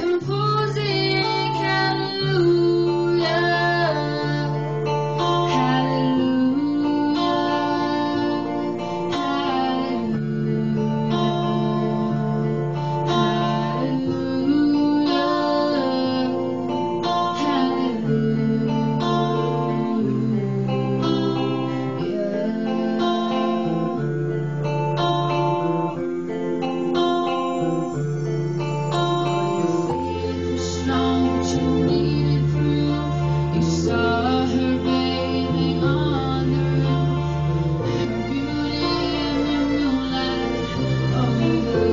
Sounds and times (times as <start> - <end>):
Female singing: 0.0 - 24.1, 29.6 - 41.9
Music: 0.0 - 41.9.